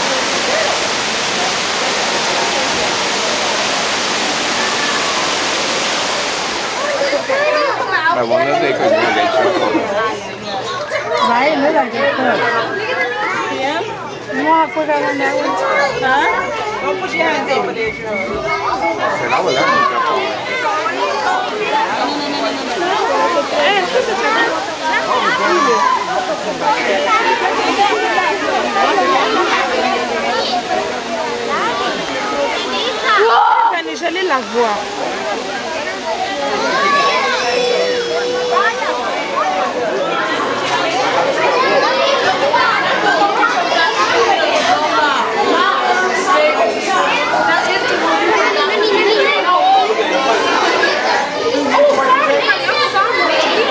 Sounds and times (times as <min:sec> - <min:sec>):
Speech: 0:06.7 - 0:53.7.